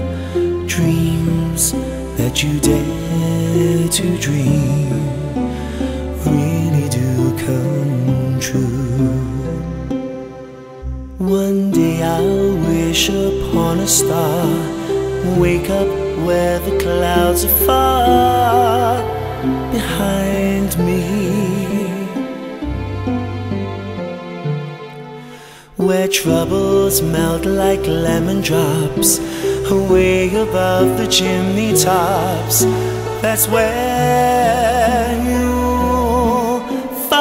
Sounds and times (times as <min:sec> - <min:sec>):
Music: 0:00.0 - 0:37.2
Singing: 0:11.2 - 0:22.4, 0:25.8 - 0:37.2.